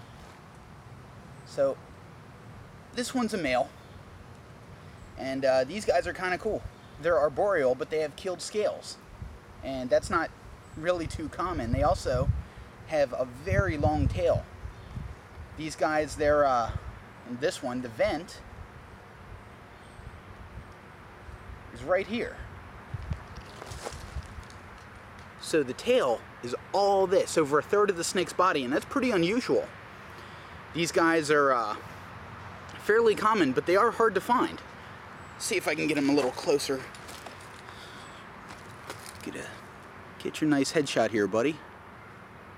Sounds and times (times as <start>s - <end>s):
Outside, rural or natural: 0.0s - 42.5s
Speech: 1.5s - 1.8s, 3.0s - 3.7s, 5.2s - 9.0s, 9.6s - 12.3s, 12.9s - 14.5s, 15.6s - 18.4s, 21.7s - 22.4s, 25.4s - 29.7s, 30.8s - 31.8s, 32.8s - 34.6s, 35.4s - 36.9s, 39.2s - 39.6s, 40.2s - 41.6s.